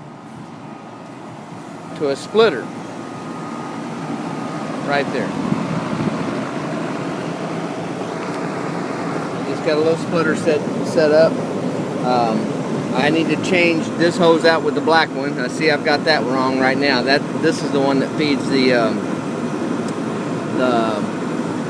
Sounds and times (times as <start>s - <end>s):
Outside, urban or manmade: 0.0s - 21.6s
Speech: 2.0s - 2.7s, 4.8s - 5.4s, 9.4s - 11.4s, 12.0s - 19.0s, 20.5s - 21.1s.